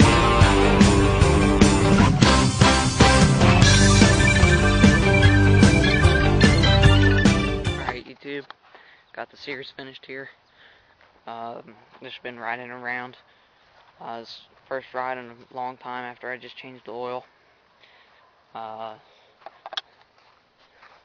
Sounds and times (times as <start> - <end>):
Music: 0.0 - 8.0
Speech: 7.8 - 8.5, 9.1 - 10.4, 11.3 - 13.2, 14.0 - 17.3, 18.6 - 19.1.